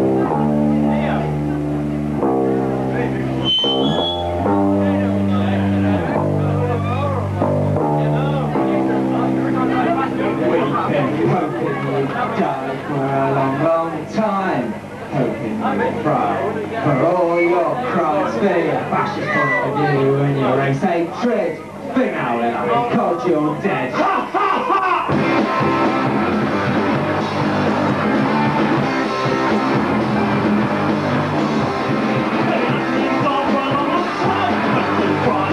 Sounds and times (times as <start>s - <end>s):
Music: 0.0s - 13.6s, 25.0s - 35.5s
Speech: 4.8s - 25.2s, 32.4s - 35.5s.